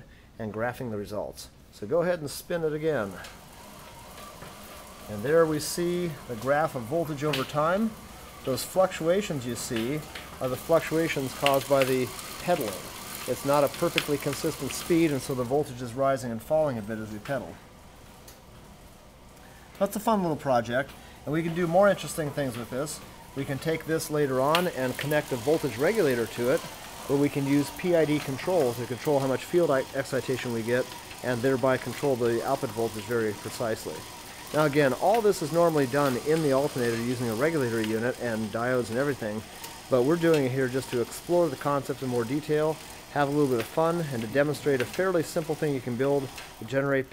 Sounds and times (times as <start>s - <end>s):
Speech: 0.0s - 3.3s, 5.0s - 17.6s, 19.8s - 47.1s
Bicycle: 0.0s - 47.1s.